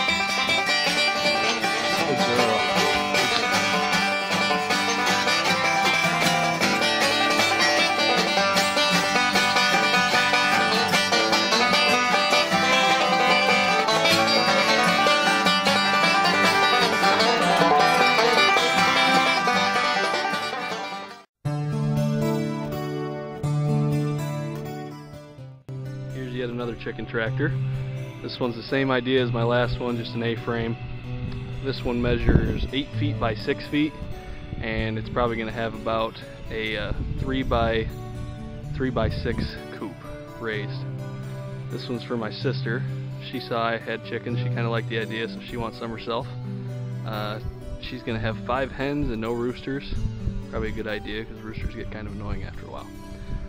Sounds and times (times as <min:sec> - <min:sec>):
Music: 0:00.0 - 0:53.4
Speech: 0:02.0 - 0:03.5, 0:26.2 - 0:27.6, 0:28.2 - 0:30.8, 0:31.6 - 0:34.0, 0:34.6 - 0:37.9, 0:38.7 - 0:40.8, 0:41.7 - 0:46.3, 0:47.1 - 0:52.9.